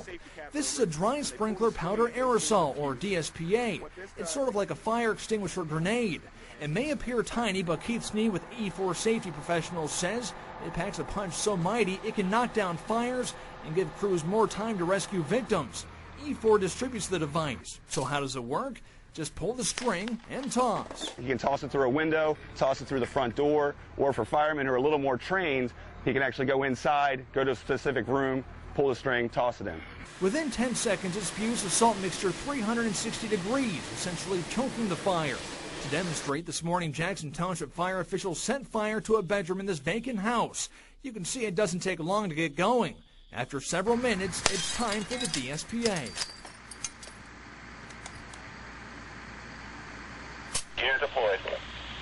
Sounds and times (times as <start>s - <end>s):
Speech: 0.0s - 46.2s, 50.8s - 51.6s.